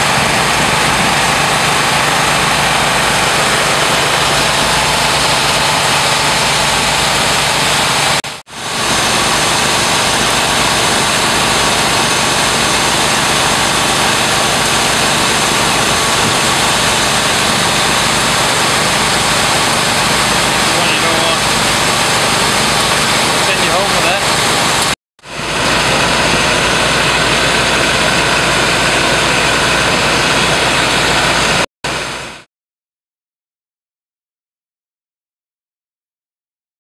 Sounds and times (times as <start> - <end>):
Outside, urban or manmade: 0.0 - 32.5.